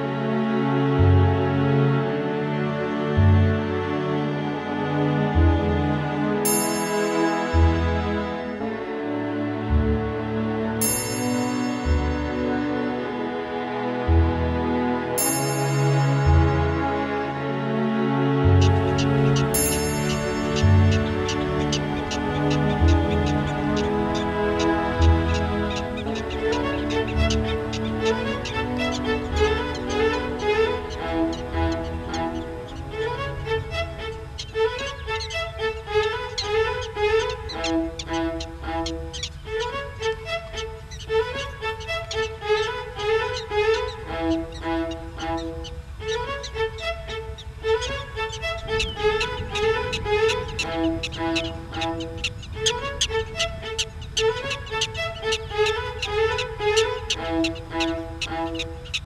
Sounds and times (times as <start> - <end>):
Music: 0.0 - 59.0.